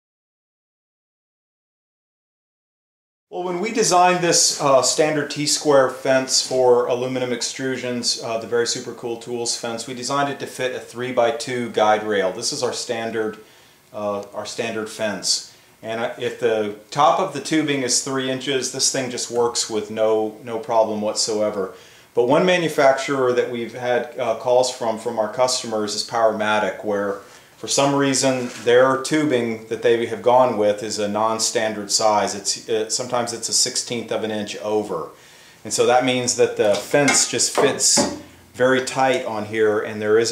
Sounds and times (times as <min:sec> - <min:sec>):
Speech: 0:03.3 - 0:40.3.